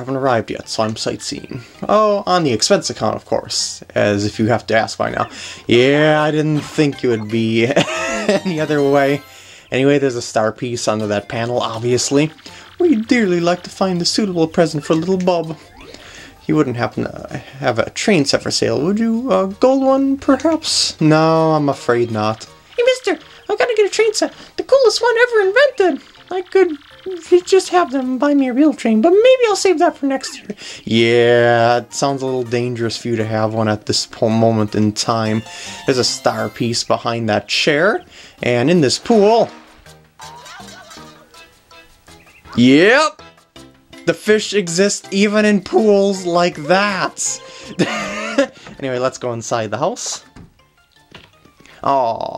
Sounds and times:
Speech: 0.0s - 15.6s, 16.4s - 39.5s, 42.6s - 43.2s, 44.0s - 47.4s, 48.8s - 50.3s, 51.8s - 52.3s
Music: 0.0s - 52.3s.

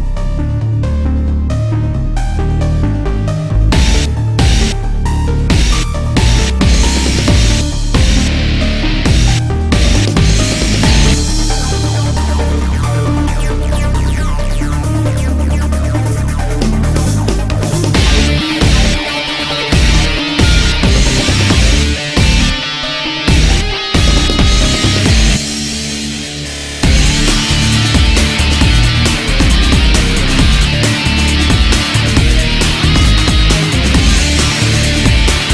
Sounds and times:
Angry music: 0.0s - 35.5s
Rock music: 0.0s - 35.5s.

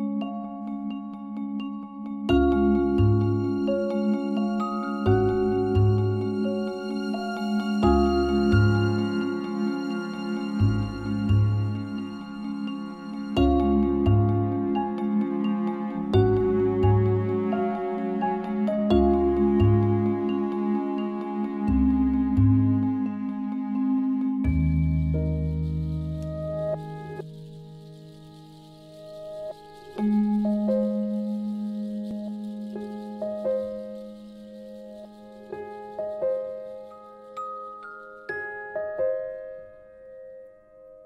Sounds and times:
Music: 0.0s - 41.0s.

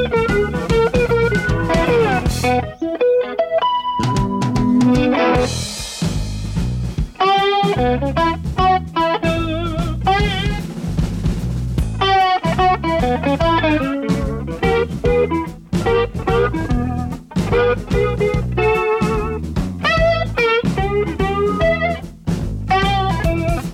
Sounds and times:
Rimshot: 0.0s - 2.7s, 4.1s - 23.7s
Acoustic guitar: 0.0s - 5.5s
Electric guitar: 0.0s - 6.2s, 7.0s - 10.7s, 11.9s - 23.7s.

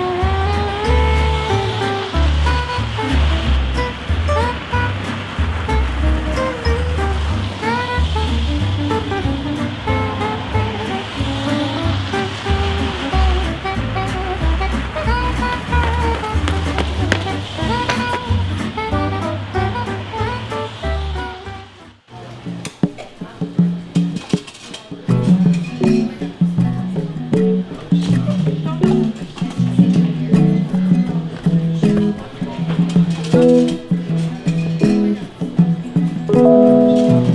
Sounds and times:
Music: 0.0s - 37.3s.

